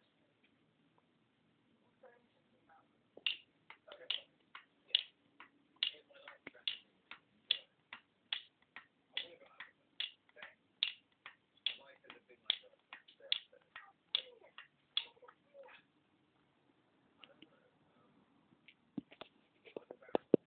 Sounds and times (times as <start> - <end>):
Speech: 5.8 - 6.8, 9.2 - 10.6, 19.7 - 20.3.